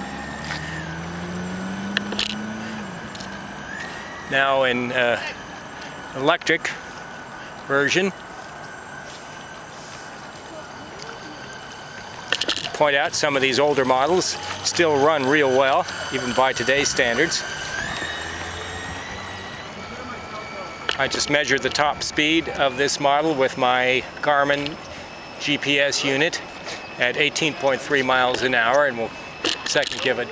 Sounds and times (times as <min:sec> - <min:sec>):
Motorboat, speedboat: 0:00.0 - 0:30.3
Speech: 0:04.3 - 0:05.4, 0:06.2 - 0:06.8, 0:07.7 - 0:08.2, 0:12.7 - 0:17.5, 0:19.8 - 0:24.8, 0:25.4 - 0:26.4, 0:27.0 - 0:30.3.